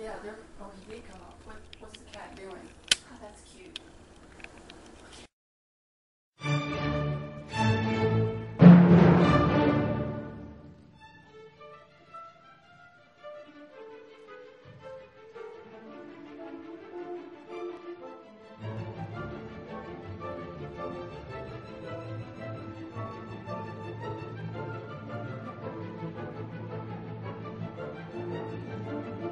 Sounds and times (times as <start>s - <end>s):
Music: 6.4s - 29.3s.